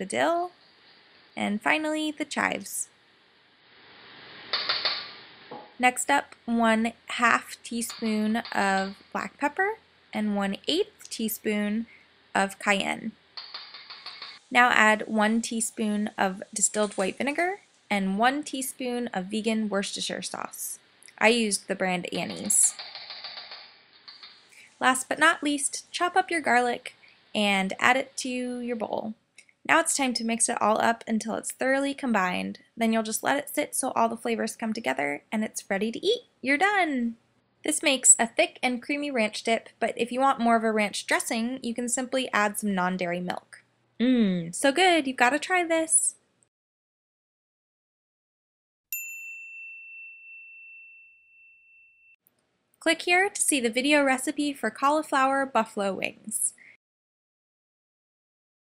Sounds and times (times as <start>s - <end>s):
Ding: 48.9s - 52.2s.